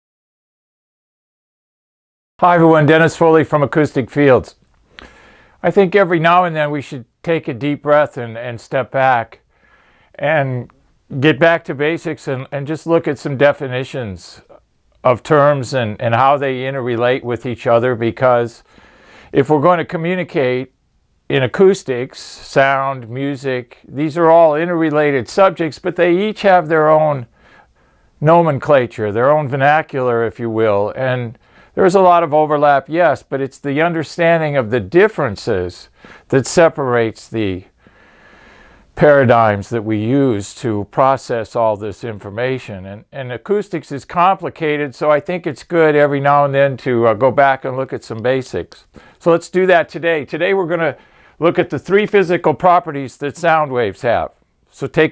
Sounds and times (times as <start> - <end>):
Speech: 2.4 - 4.6, 5.6 - 9.4, 10.2 - 18.7, 19.3 - 20.7, 21.3 - 27.3, 28.2 - 37.8, 39.0 - 55.1.